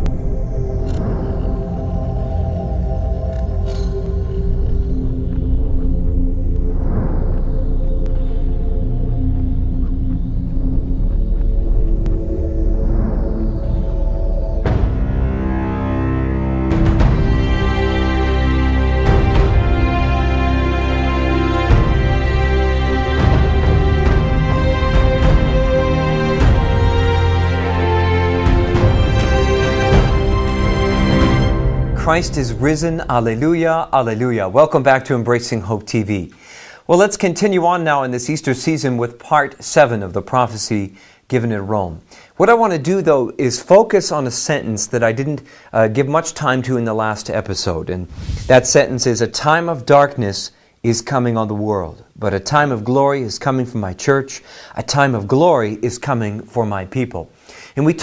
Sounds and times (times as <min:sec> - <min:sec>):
Music: 0:00.0 - 0:34.6.